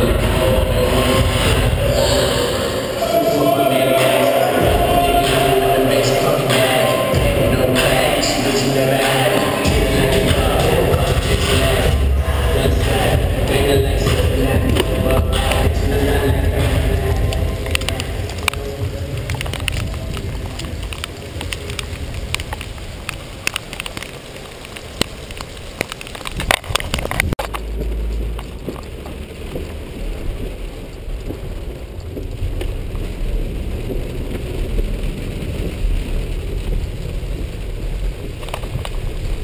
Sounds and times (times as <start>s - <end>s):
Run: 9.0s - 39.4s.